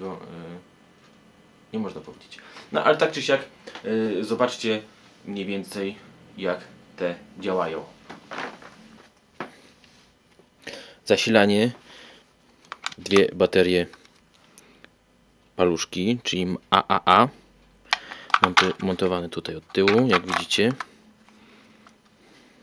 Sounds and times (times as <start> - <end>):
Speech: 0.0 - 0.7, 1.7 - 8.0, 11.1 - 11.8, 13.0 - 14.0, 15.6 - 17.4, 18.4 - 20.8.